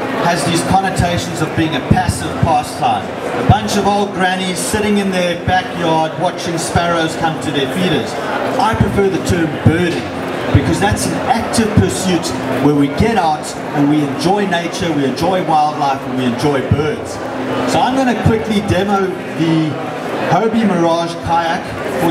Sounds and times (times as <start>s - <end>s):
Speech: 0.0s - 22.1s.